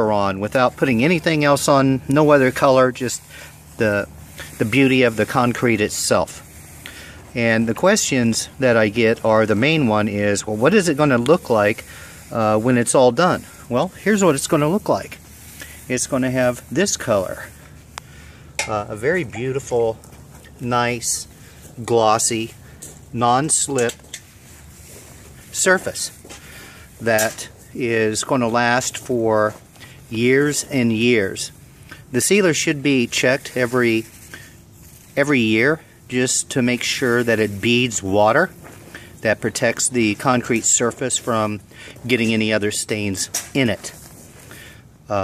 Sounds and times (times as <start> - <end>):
Speech: 0.0 - 6.5, 7.3 - 15.2, 15.9 - 17.6, 18.6 - 20.0, 20.6 - 24.0, 25.5 - 26.2, 27.0 - 34.2, 35.1 - 38.6, 39.2 - 44.0.